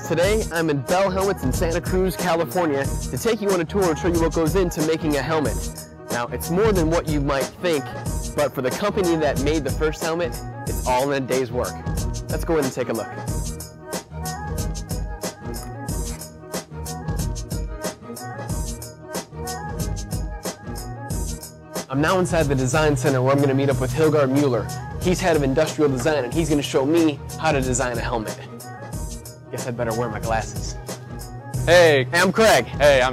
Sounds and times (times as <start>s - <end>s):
Music: 0.0s - 33.1s
Speech: 8.4s - 11.7s, 12.3s - 13.2s, 21.9s - 28.4s, 29.6s - 30.8s, 31.7s - 33.1s.